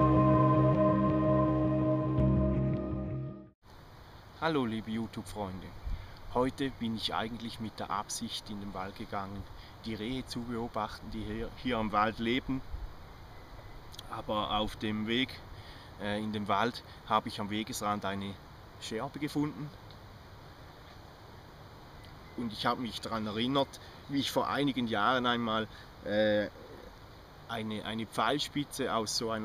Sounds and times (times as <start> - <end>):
Speech: 4.4 - 12.6, 14.0 - 15.4, 16.0 - 19.8, 22.4 - 26.8, 27.5 - 29.4.